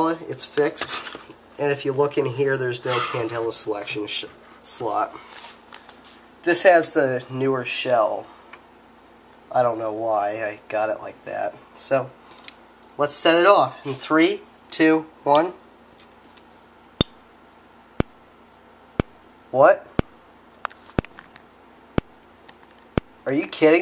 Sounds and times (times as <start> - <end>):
Speech: 0.0 - 5.2, 6.4 - 8.3, 9.5 - 12.2, 13.0 - 15.6, 19.5 - 20.0, 23.2 - 23.8.